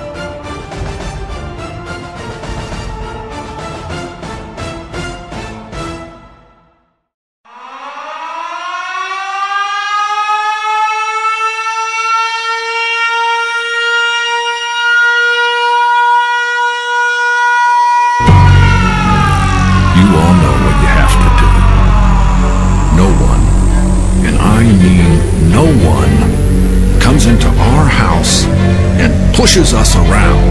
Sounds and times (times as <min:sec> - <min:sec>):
Siren: 0:00.0 - 0:04.5, 0:07.4 - 0:30.5.